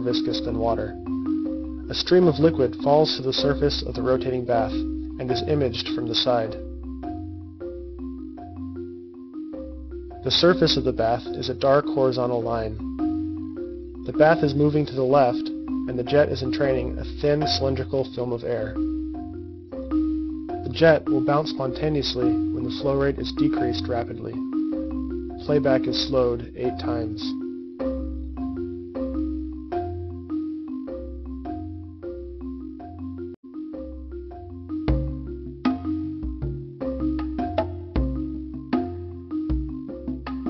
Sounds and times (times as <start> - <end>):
Speech: 0.0 - 1.0, 1.9 - 6.6, 10.2 - 12.8, 14.1 - 18.8, 20.7 - 24.4, 25.4 - 27.4
Music: 0.0 - 40.4.